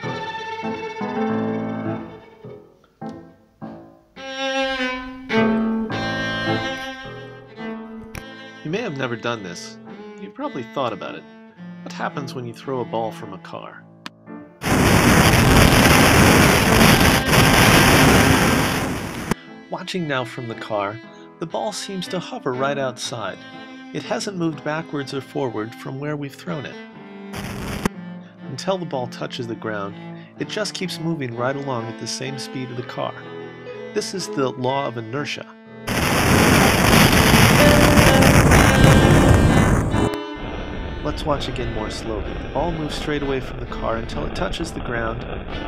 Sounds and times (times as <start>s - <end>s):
Music: 0.0s - 45.6s
Speech: 8.6s - 11.3s, 11.9s - 13.8s, 19.7s - 23.4s, 24.0s - 26.8s, 28.5s - 33.2s, 34.0s - 35.5s, 41.0s - 45.3s.